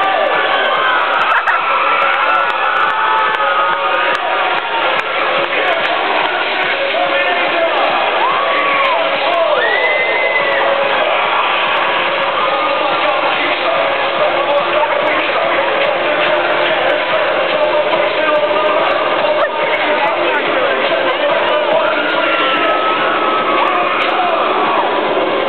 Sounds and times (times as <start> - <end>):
Techno: 0.0 - 25.4.